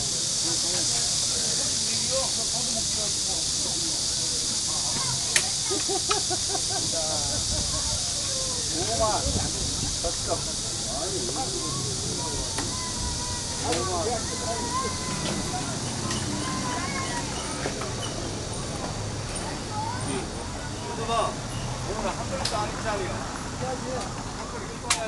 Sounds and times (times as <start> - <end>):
Speech: 6.8 - 18.0, 19.4 - 25.0.